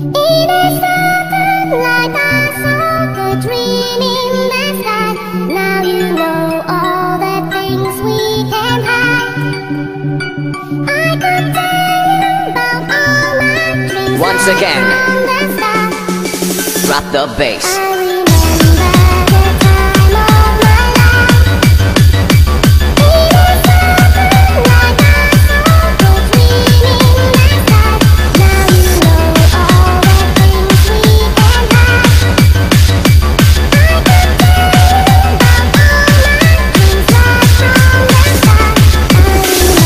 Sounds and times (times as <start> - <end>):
Music: 0.0 - 39.8
Speech: 14.2 - 15.0, 16.9 - 17.8.